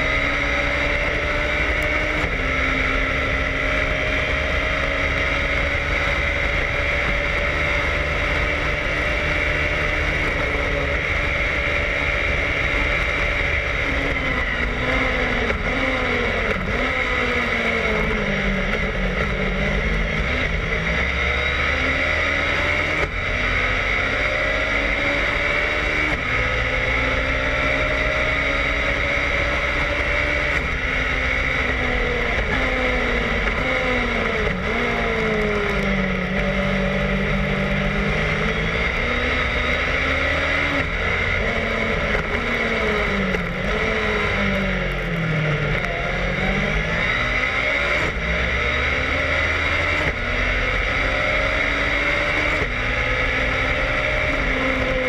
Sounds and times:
Car: 0.0 - 55.0.

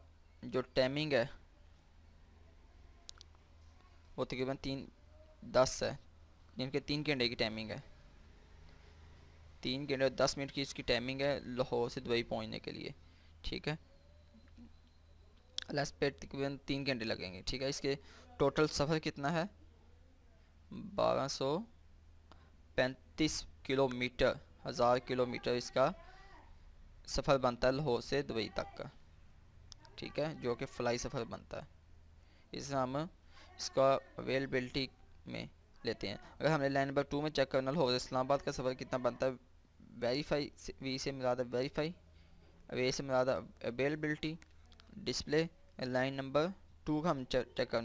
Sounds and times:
Speech: 4.2 - 6.0, 9.6 - 13.8, 22.8 - 26.4, 27.1 - 29.0, 29.8 - 31.7, 32.6 - 42.0, 42.7 - 47.8.

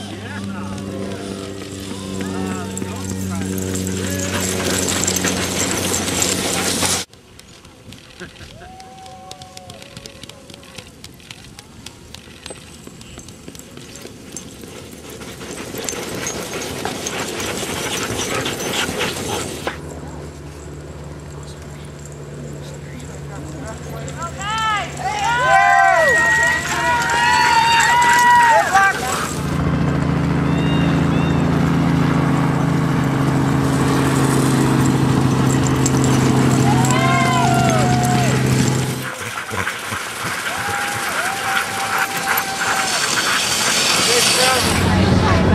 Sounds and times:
Dog: 3.5 - 7.1, 13.2 - 19.8, 39.0 - 44.7.

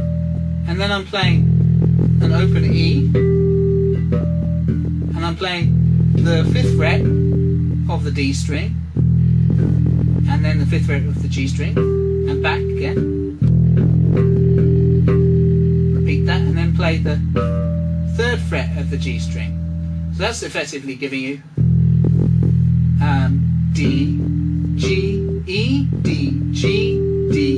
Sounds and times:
Bass guitar: 0.0 - 20.8, 21.4 - 27.5
Speech: 0.7 - 1.5, 2.2 - 3.2, 5.1 - 7.2, 7.9 - 8.8, 10.3 - 13.1, 16.0 - 17.3, 18.2 - 19.6, 20.2 - 21.5, 23.0 - 27.5
Electric guitar: 8.8 - 18.2.

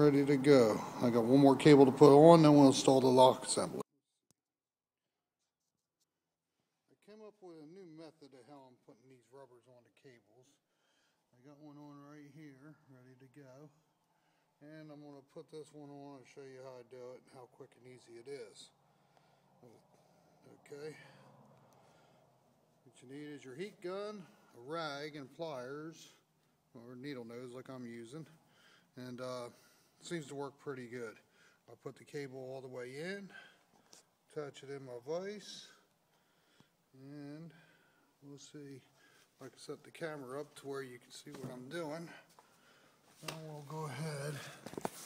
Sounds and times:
Speech: 0.0 - 3.8, 6.9 - 10.6, 11.3 - 13.8, 14.6 - 18.7, 20.4 - 21.2, 22.9 - 28.4, 29.0 - 33.5, 34.3 - 35.8, 37.0 - 37.6, 38.2 - 42.3, 43.2 - 44.6.

